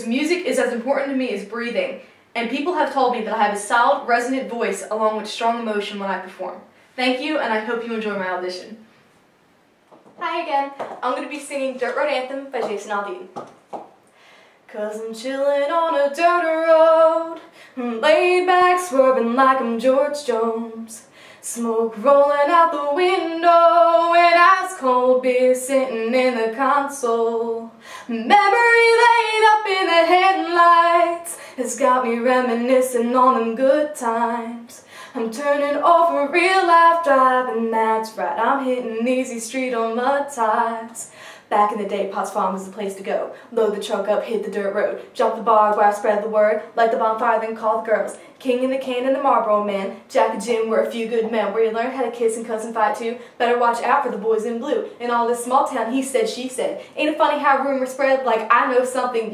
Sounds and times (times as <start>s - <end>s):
Speech: 0.0s - 8.8s, 10.2s - 13.4s, 37.5s - 59.3s.